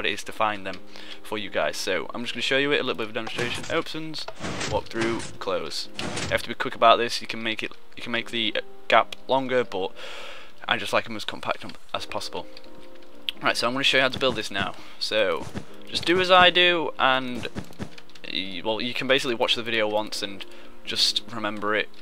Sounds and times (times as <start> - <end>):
Speech: 0.0 - 9.9, 10.6 - 12.5, 13.3 - 17.5, 18.2 - 21.9
Music: 0.0 - 22.0.